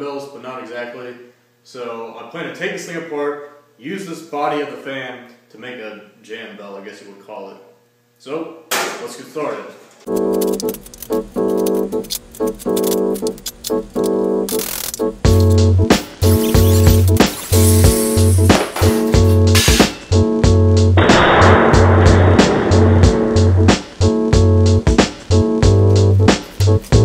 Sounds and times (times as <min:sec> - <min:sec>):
Speech: 0:00.0 - 0:09.8
Music: 0:10.1 - 0:27.0.